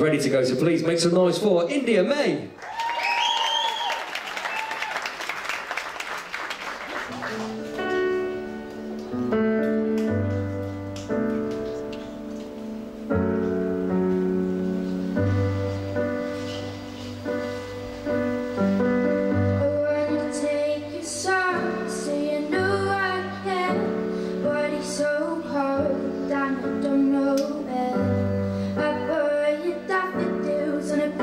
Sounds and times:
Music: 6.4 - 31.2
Female singing: 19.6 - 31.2.

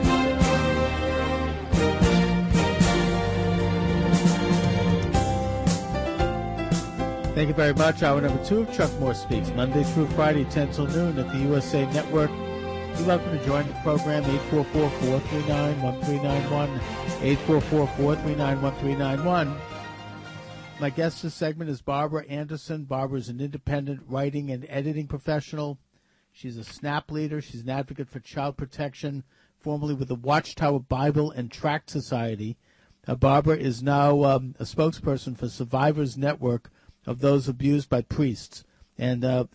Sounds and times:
Music: 0.0 - 21.3
Speech: 7.4 - 12.3, 13.0 - 19.6, 20.8 - 25.8, 26.4 - 39.5.

